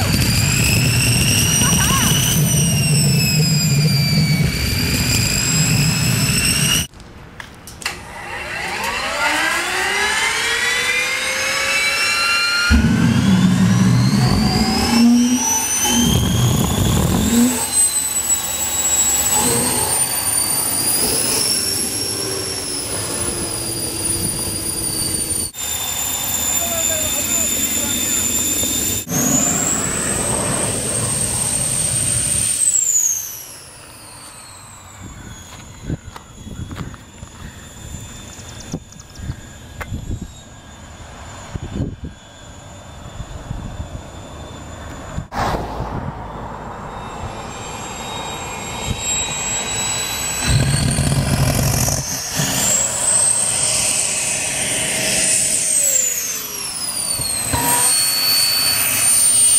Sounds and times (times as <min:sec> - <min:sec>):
Vehicle: 0:00.0 - 0:59.5
Speech: 0:01.6 - 0:02.2, 0:26.4 - 0:28.3.